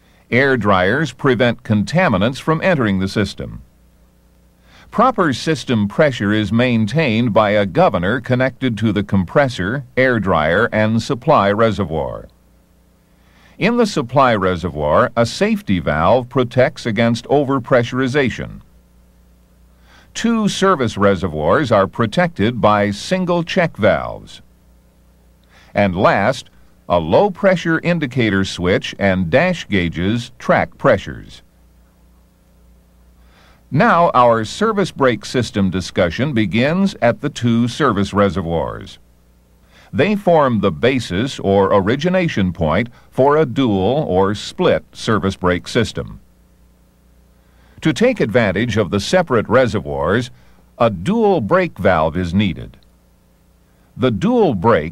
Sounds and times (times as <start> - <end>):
Speech: 0.3 - 3.7, 4.9 - 12.3, 13.6 - 18.7, 20.2 - 24.5, 25.7 - 31.5, 33.7 - 39.0, 39.9 - 46.2, 47.8 - 52.8, 54.0 - 54.9.